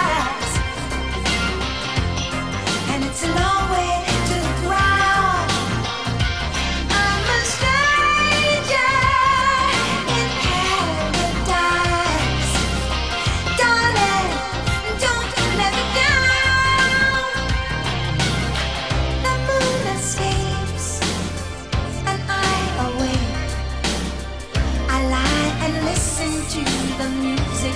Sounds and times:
Music of Asia: 0.0 - 27.7.

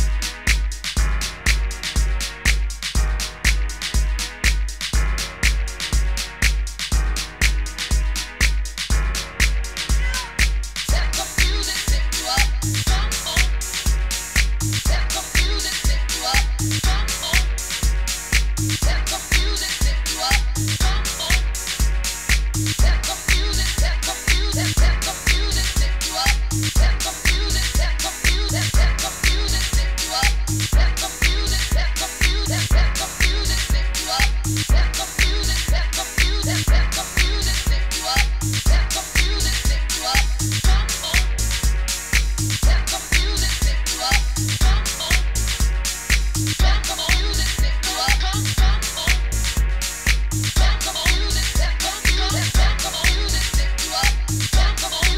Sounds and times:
Disco: 0.0 - 55.1
Hip hop music: 0.0 - 55.1.

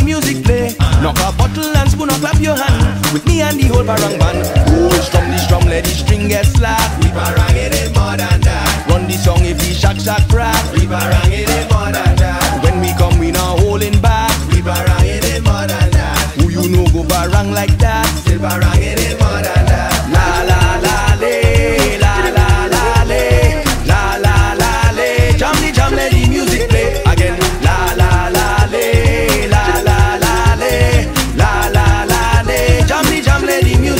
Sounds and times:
Music of Africa: 0.0 - 33.9
Singing: 0.0 - 33.9.

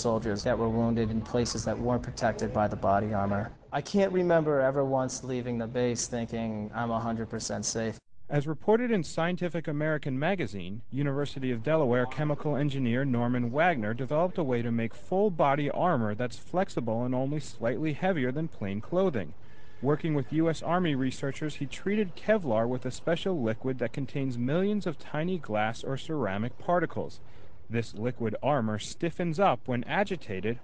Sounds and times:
Speech: 0.0 - 30.6.

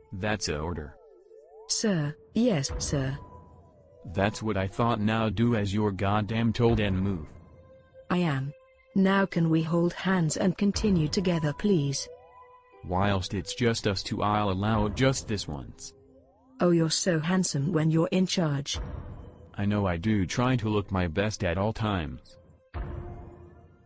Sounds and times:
Speech: 0.0 - 1.0, 1.7 - 3.2, 4.1 - 7.3, 8.1 - 12.1, 12.8 - 15.9, 16.6 - 18.8, 19.6 - 22.3.

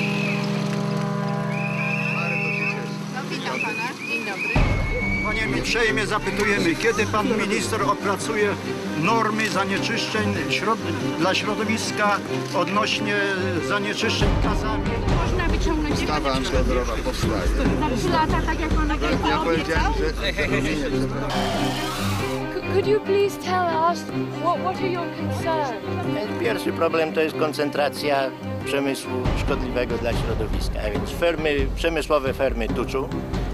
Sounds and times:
Music: 0.0 - 33.5.

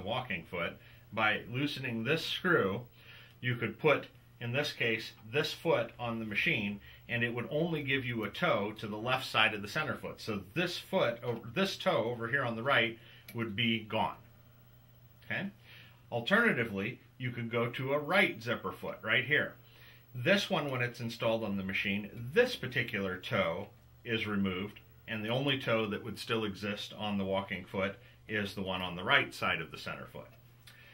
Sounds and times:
Speech: 0.0 - 14.3, 15.2 - 19.6, 20.2 - 30.4.

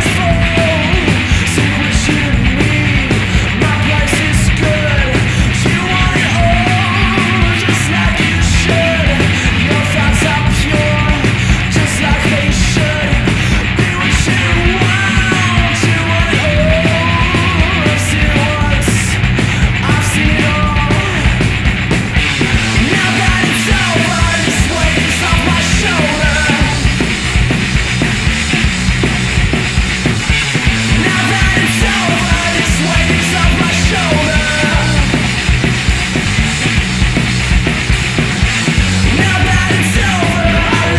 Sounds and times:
Music: 0.0 - 40.9.

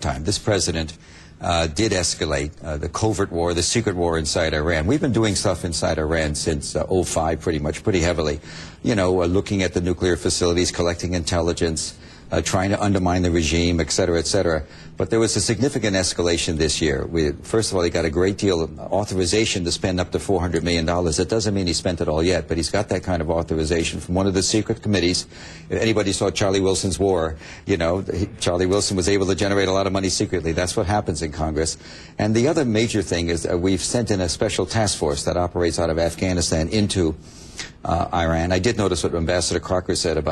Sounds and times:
Speech: 0.0 - 37.2, 37.8 - 40.3.

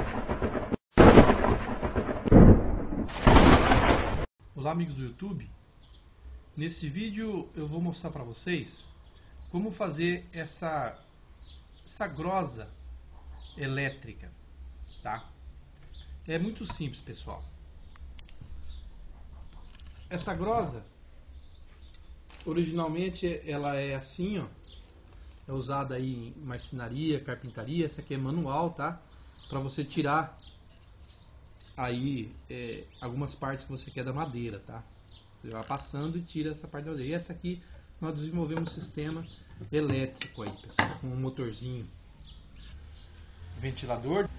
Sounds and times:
Speech: 4.6 - 5.6, 6.6 - 8.9, 9.5 - 11.0, 11.9 - 12.8, 13.6 - 14.4, 15.0 - 15.4, 16.3 - 17.5, 20.1 - 20.9, 22.4 - 24.6, 25.5 - 30.4, 31.8 - 42.0, 43.6 - 44.3.

